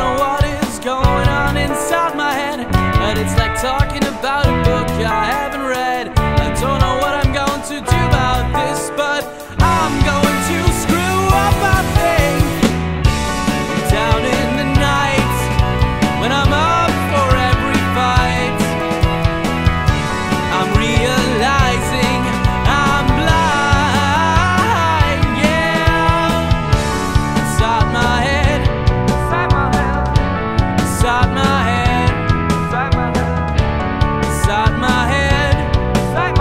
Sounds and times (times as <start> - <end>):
Music: 0.0 - 36.4.